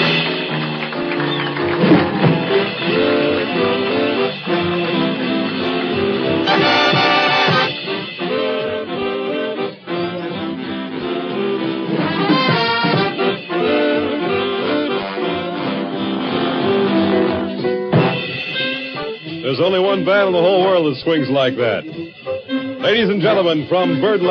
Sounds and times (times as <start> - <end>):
Saxophone: 0.0 - 24.3
Speech: 19.4 - 21.9, 22.8 - 24.3.